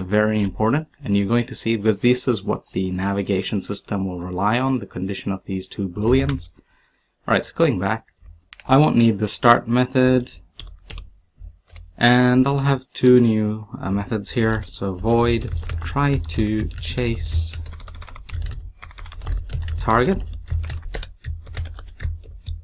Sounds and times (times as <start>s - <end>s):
Computer keyboard: 6.0s - 6.5s, 10.2s - 11.1s, 11.7s - 12.0s, 14.3s - 22.6s.